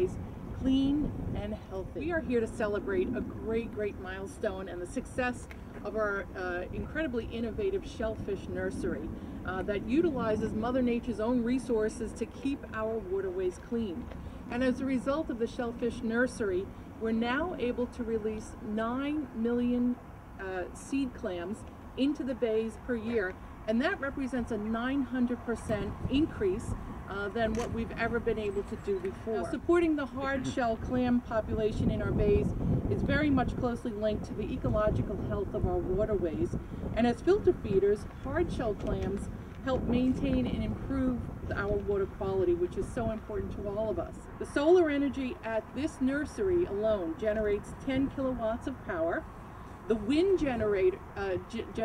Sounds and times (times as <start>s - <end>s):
Speech: 0.0s - 49.2s, 49.9s - 51.8s.